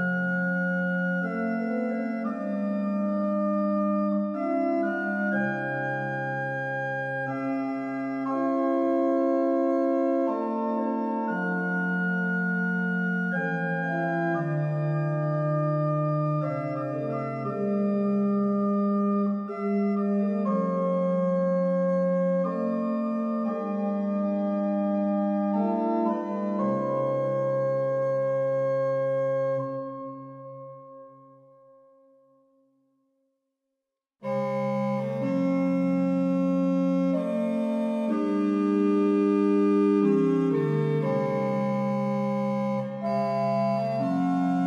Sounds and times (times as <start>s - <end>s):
Music: 0.0s - 44.6s.